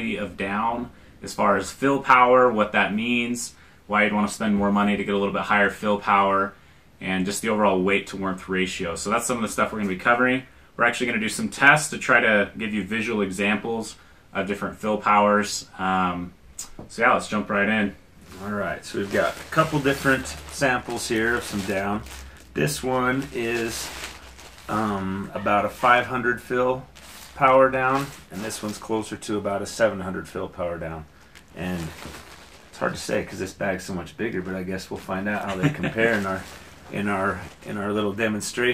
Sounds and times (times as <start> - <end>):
Speech: 0.0 - 24.0, 24.7 - 32.1, 32.7 - 38.7.